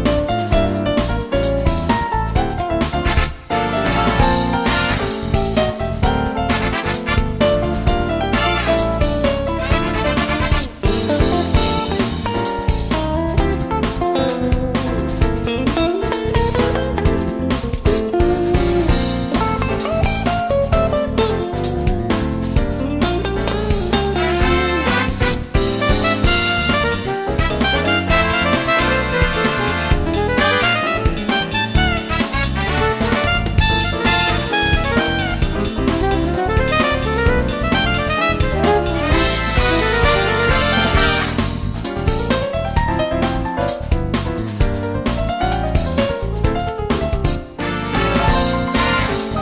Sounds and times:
Music: 0:00.0 - 0:49.4.

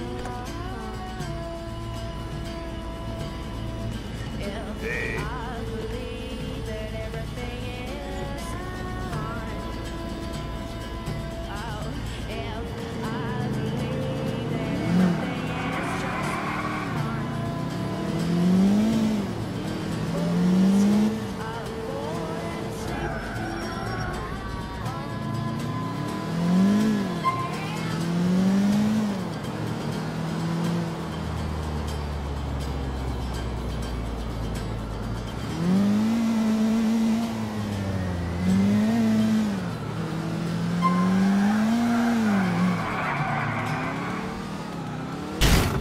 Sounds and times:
Music: 0:00.0 - 0:41.2
Car: 0:00.0 - 0:45.8.

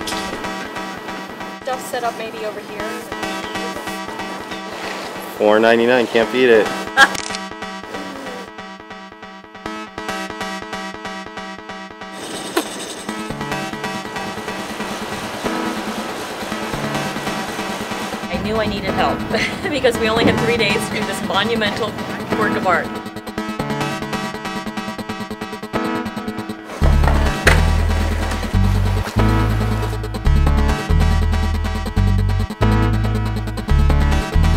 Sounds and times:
Music: 0:00.0 - 0:34.5
Speech: 0:18.3 - 0:22.9.

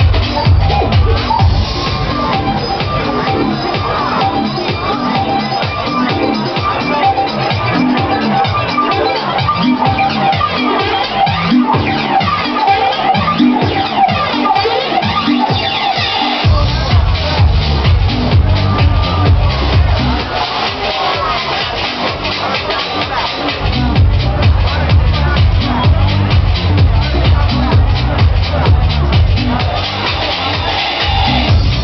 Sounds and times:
House music: 0:00.0 - 0:31.8.

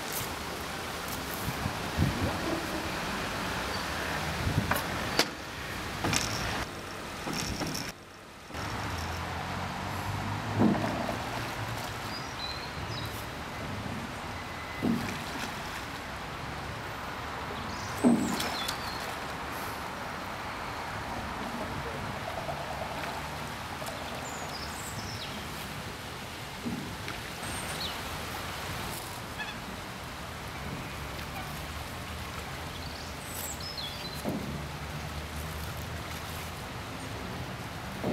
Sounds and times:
Rowboat, canoe, kayak: 0:00.0 - 0:38.1
Wind: 0:00.0 - 0:38.1.

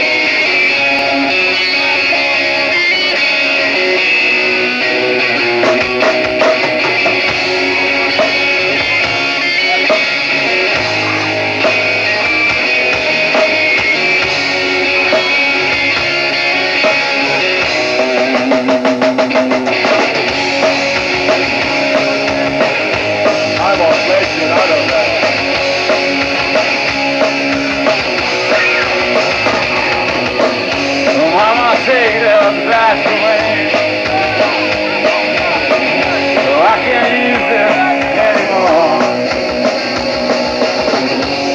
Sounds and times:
Music: 0:00.0 - 0:41.5
Speech: 0:23.5 - 0:25.3, 0:31.1 - 0:40.0.

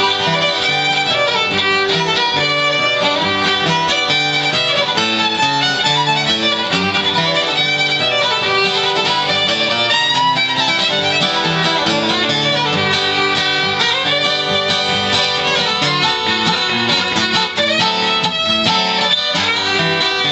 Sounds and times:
Bluegrass: 0:00.0 - 0:20.3
Guitar: 0:00.0 - 0:20.3.

